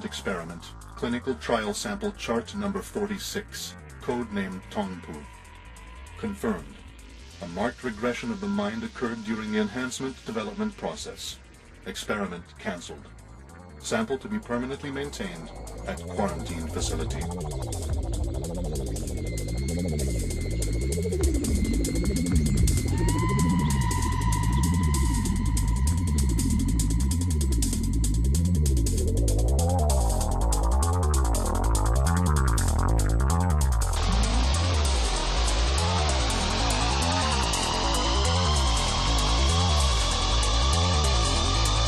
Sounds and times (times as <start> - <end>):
Music: 0.0 - 41.8.